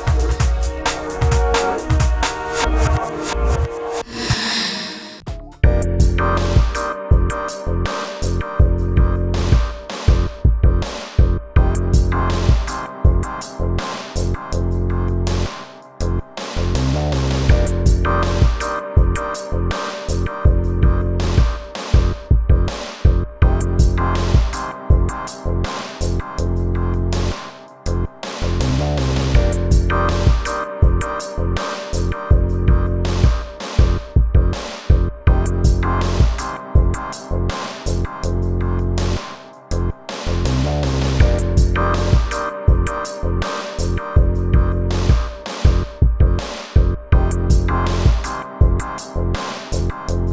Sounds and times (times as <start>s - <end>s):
Music: 0.0s - 50.3s.